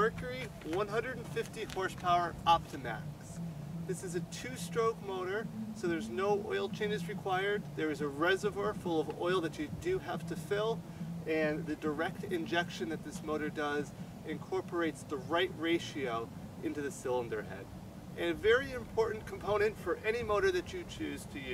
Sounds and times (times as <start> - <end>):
Music: 0.0 - 21.5
Speech: 0.0 - 21.5.